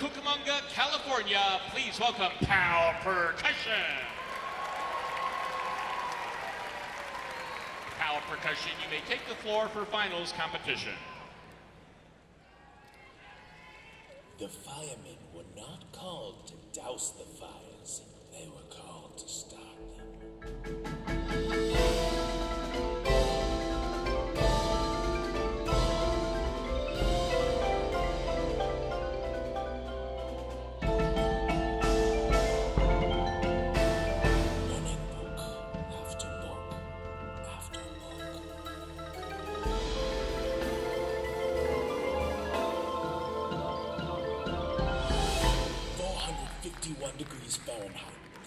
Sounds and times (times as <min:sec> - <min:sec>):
Percussion: 0:18.8 - 0:48.4.